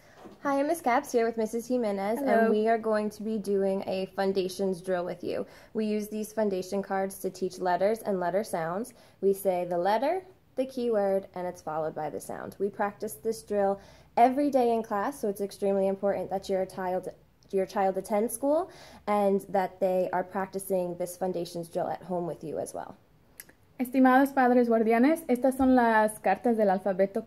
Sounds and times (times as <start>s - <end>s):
Speech: 0.4s - 23.0s.